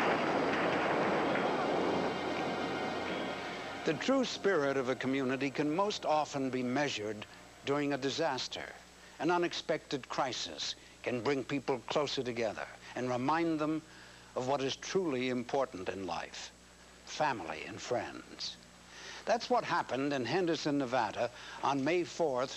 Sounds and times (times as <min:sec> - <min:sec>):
Speech: 0:03.9 - 0:18.6, 0:19.2 - 0:22.5.